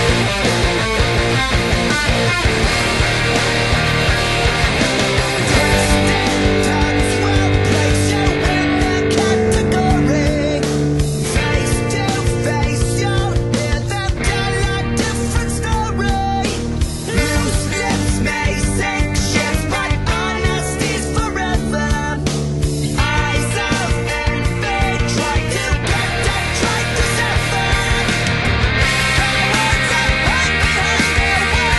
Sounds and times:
Strum: 0:00.0 - 0:15.4
Bass guitar: 0:00.0 - 0:31.7
Electric guitar: 0:00.0 - 0:31.7.

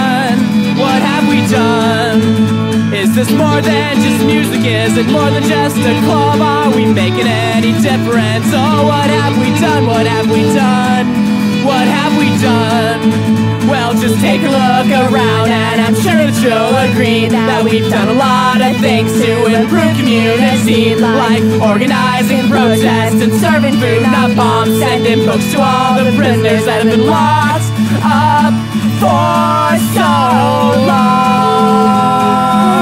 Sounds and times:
Music: 0:00.0 - 0:32.8.

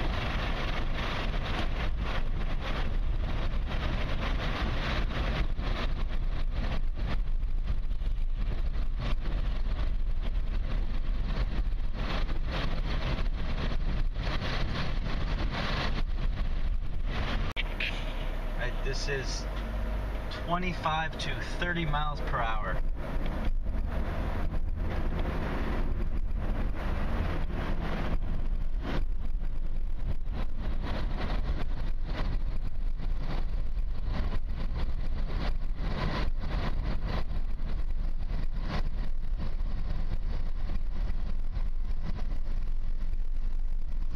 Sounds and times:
Wind: 0:00.0 - 0:44.1.

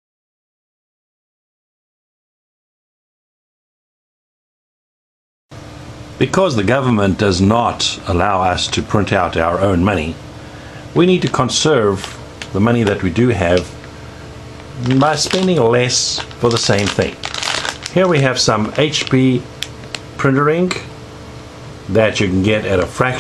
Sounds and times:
Speech: 0:06.2 - 0:10.2, 0:11.0 - 0:13.8, 0:14.8 - 0:17.3, 0:17.9 - 0:19.5, 0:20.2 - 0:20.9, 0:21.9 - 0:23.2.

